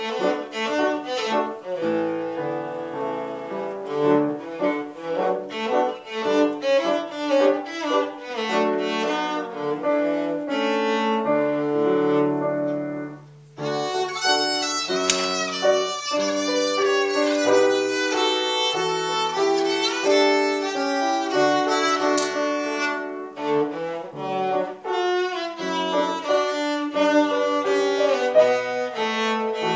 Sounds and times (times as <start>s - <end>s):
Cello: 0.0s - 29.7s
Violin, fiddle: 0.0s - 29.7s.